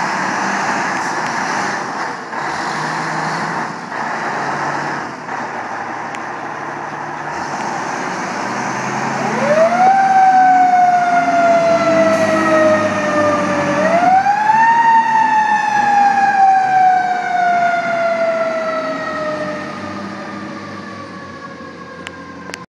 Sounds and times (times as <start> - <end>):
Truck: 0.0 - 22.6.